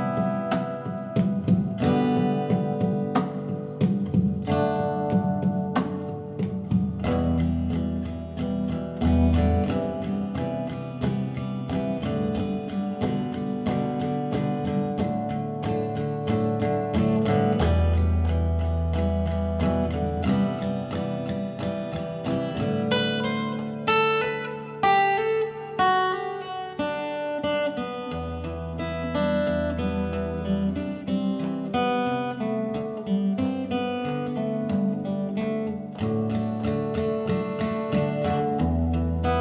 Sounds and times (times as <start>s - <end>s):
Acoustic guitar: 0.0s - 39.4s
Electric guitar: 0.0s - 39.4s
Strum: 0.0s - 39.4s.